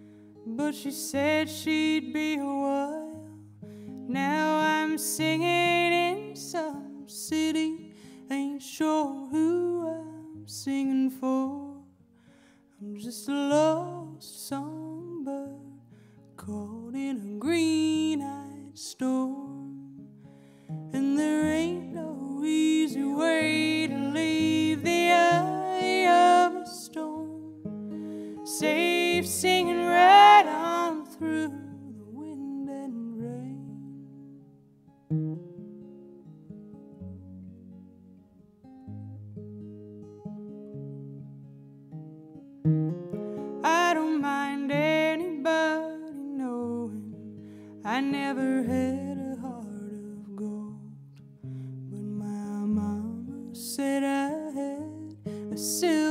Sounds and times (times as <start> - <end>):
Music: 0.0 - 56.1.